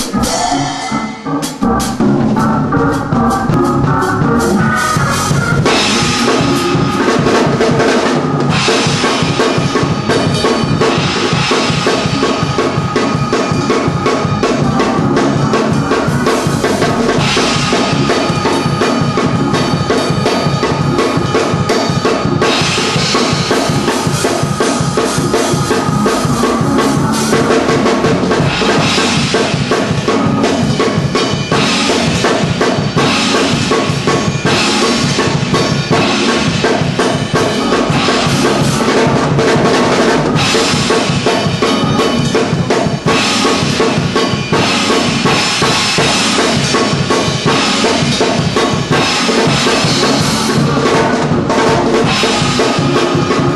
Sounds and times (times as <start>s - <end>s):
Music: 0.0s - 53.5s.